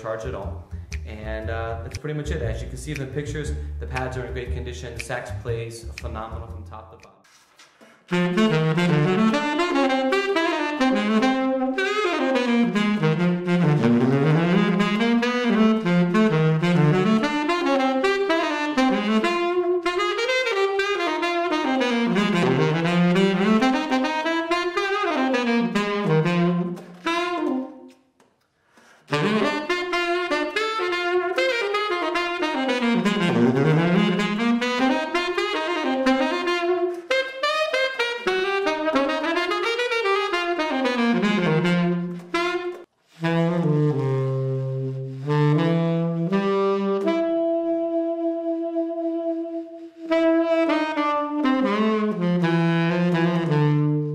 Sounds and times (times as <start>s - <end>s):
Jazz: 0.0s - 28.0s, 29.1s - 54.1s
Saxophone: 0.0s - 28.2s, 28.8s - 54.1s
Trumpet: 8.1s - 28.0s, 29.1s - 54.1s.